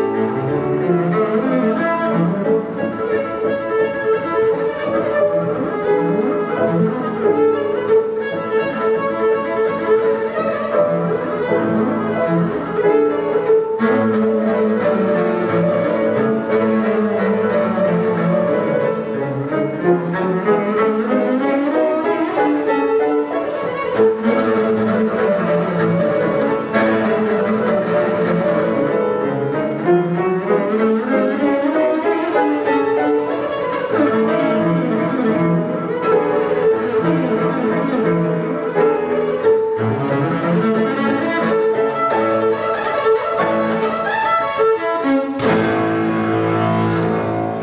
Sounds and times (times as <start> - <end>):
Cello: 0.0 - 47.6.